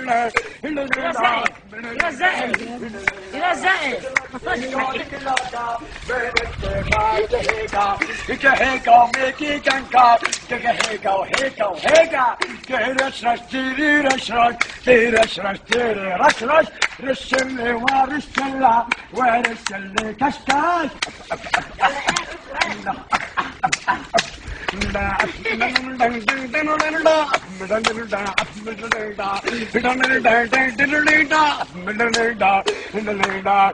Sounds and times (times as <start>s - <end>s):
Male singing: 0.0s - 33.7s.